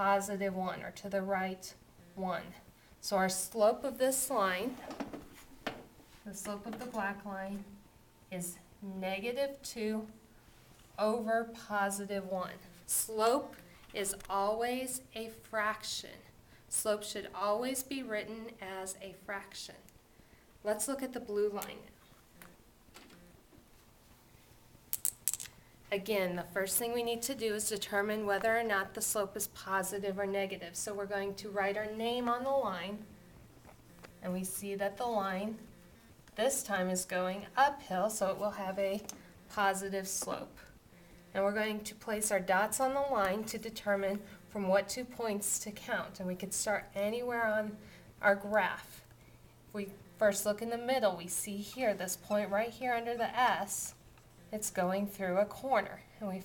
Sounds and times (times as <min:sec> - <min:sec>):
Speech: 0:00.0 - 0:04.8, 0:06.2 - 0:10.2, 0:11.0 - 0:19.9, 0:20.6 - 0:22.0, 0:25.9 - 0:33.1, 0:34.2 - 0:35.7, 0:36.4 - 0:49.0, 0:49.7 - 0:56.4
Inside, small room: 0:00.0 - 0:56.4.